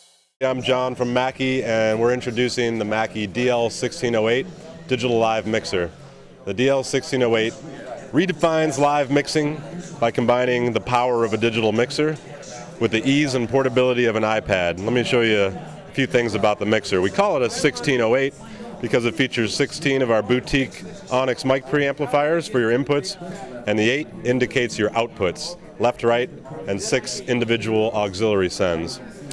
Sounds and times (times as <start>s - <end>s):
Speech: 0.4s - 29.3s.